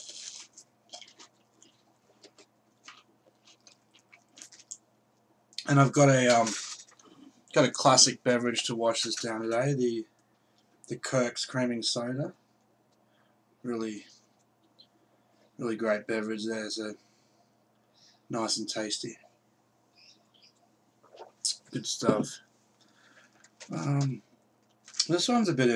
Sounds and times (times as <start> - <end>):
Speech: 5.6 - 6.7, 7.5 - 10.1, 10.9 - 12.4, 13.6 - 14.2, 15.6 - 17.0, 18.3 - 19.3, 21.5 - 22.4, 23.7 - 24.2, 25.0 - 25.7.